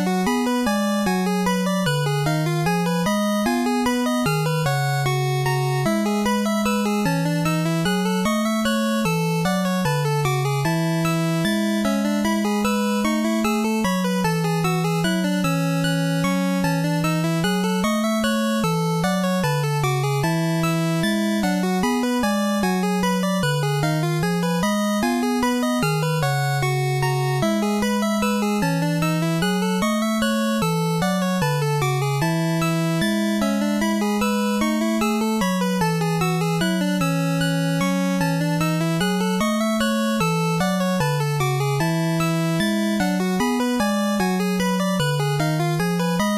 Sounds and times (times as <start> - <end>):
Music: 0.0 - 46.3.